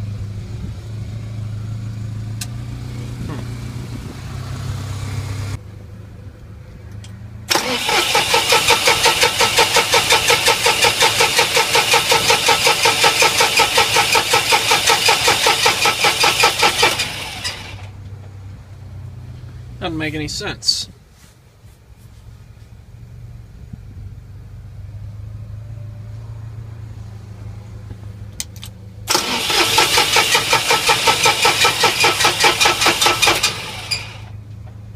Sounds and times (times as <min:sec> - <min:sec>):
Outside, urban or manmade: 0:00.0 - 0:34.9.